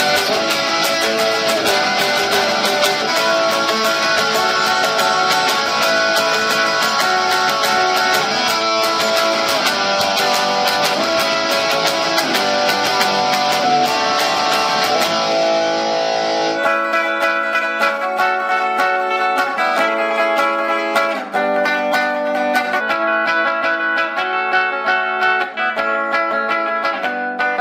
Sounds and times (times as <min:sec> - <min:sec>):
Electric guitar: 0:00.0 - 0:27.6.